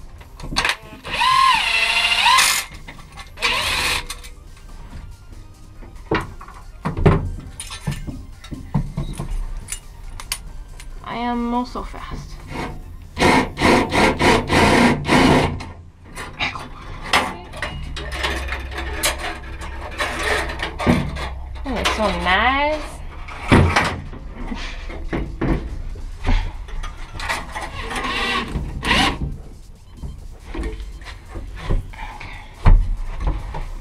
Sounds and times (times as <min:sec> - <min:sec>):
Music: 0:00.0 - 0:33.8
Tools: 0:06.1 - 0:10.4, 0:12.6 - 0:22.2.